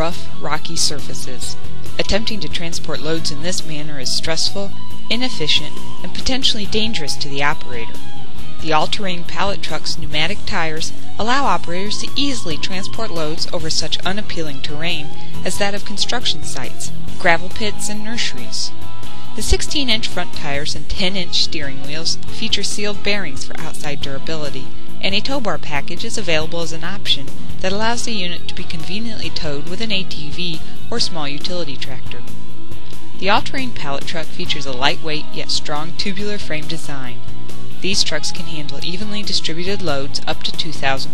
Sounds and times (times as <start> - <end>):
Speech: 0.0 - 7.9, 8.6 - 18.7, 19.4 - 32.2, 33.2 - 37.2, 37.8 - 41.1
Music: 0.0 - 41.1.